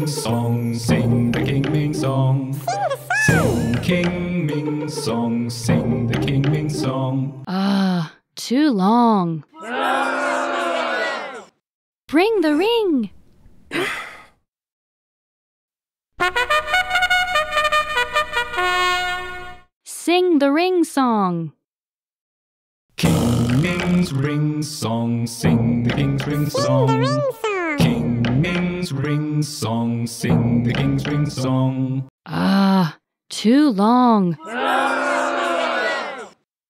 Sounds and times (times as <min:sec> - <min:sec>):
Speech: 0:02.7 - 0:03.5, 0:26.5 - 0:27.9, 0:32.8 - 0:34.6
Singing: 0:23.6 - 0:32.0.